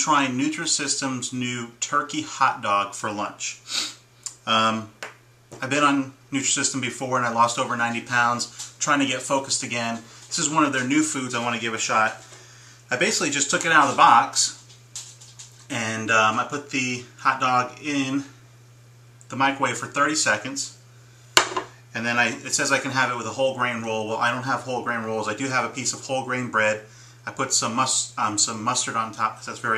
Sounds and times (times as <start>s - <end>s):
Speech: 0.0s - 3.7s, 4.3s - 5.0s, 5.6s - 12.2s, 12.9s - 14.6s, 15.7s - 18.4s, 19.3s - 20.8s, 21.9s - 29.7s.